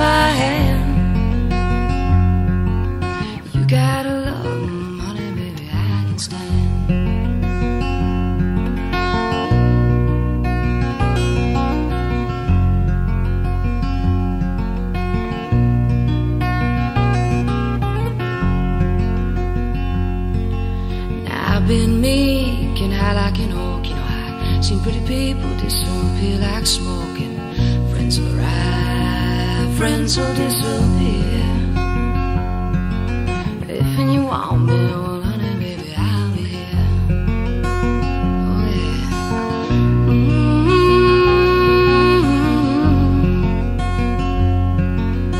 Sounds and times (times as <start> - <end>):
Music: 0.0 - 45.3.